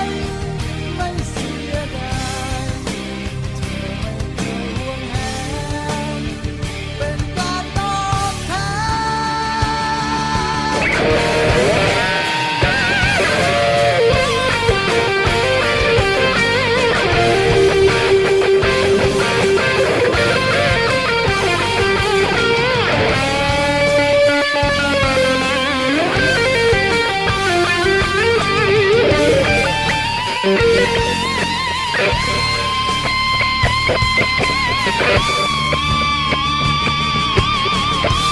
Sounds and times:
Strum: 10.8 - 38.3.

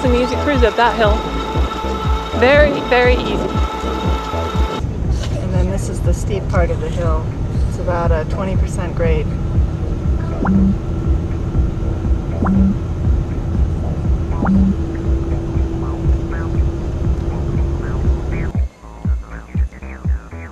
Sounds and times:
Speech: 0.0 - 1.2, 2.4 - 3.6, 5.0 - 9.4
Vehicle: 0.0 - 19.5
Music: 0.0 - 20.5.

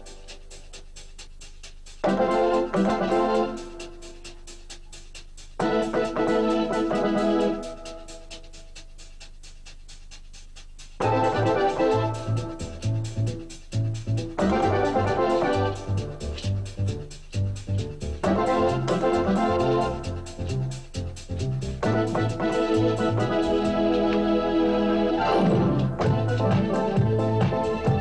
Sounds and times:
Music: 0.0 - 28.0.

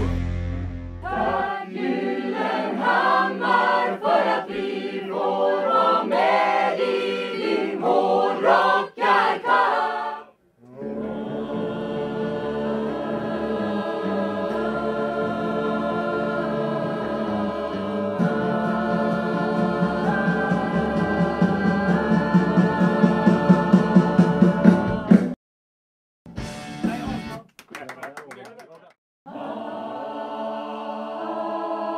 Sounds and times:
Music: 0.0 - 25.4, 26.3 - 27.5, 29.4 - 31.9
Speech: 26.9 - 29.0.

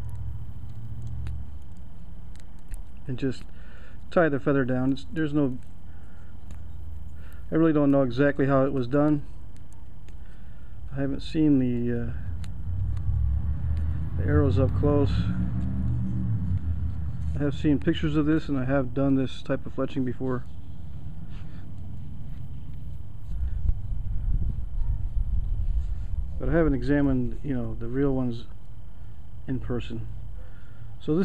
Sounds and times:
Speech: 3.1 - 3.5, 4.1 - 5.6, 7.5 - 9.3, 10.9 - 12.3, 14.2 - 15.4, 17.4 - 20.5, 26.4 - 28.5, 29.5 - 30.1, 31.0 - 31.2.

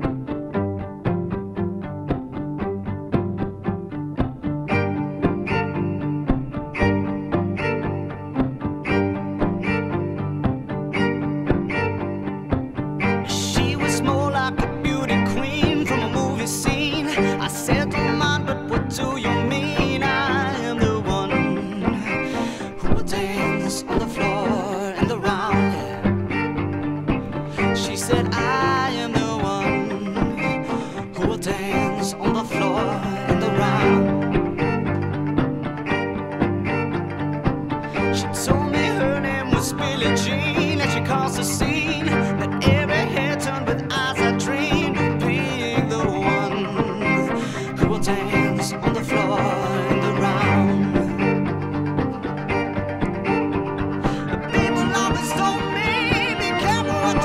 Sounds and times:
Violin, fiddle: 0.0 - 57.2.

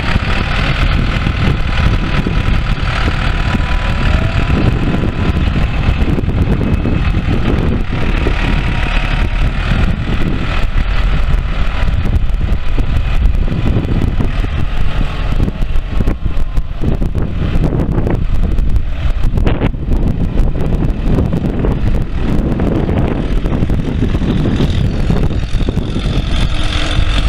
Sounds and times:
Outside, rural or natural: 0.0 - 27.2
Vehicle: 0.0 - 27.2.

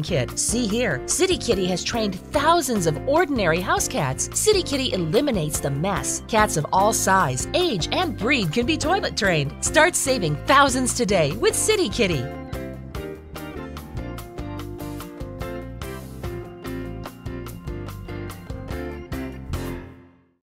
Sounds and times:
Speech: 0.0 - 12.3
Music: 0.0 - 20.4.

